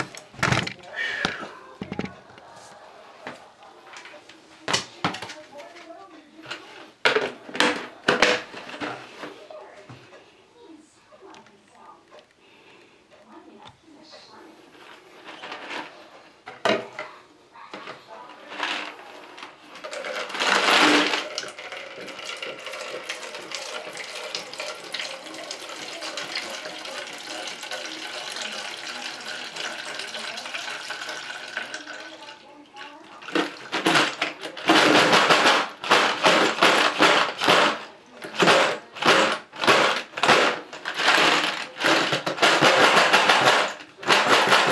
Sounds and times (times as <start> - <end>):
Inside, small room: 0.0 - 44.7
Speech: 4.0 - 6.8, 24.8 - 34.8.